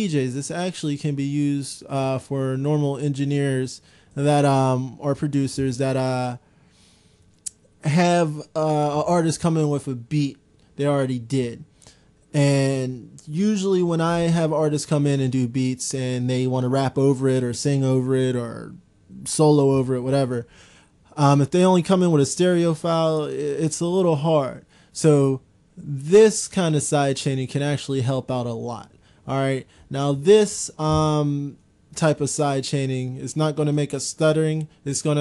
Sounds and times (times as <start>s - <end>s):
Speech: 0.0s - 6.4s, 7.8s - 11.7s, 12.3s - 20.5s, 21.1s - 35.2s.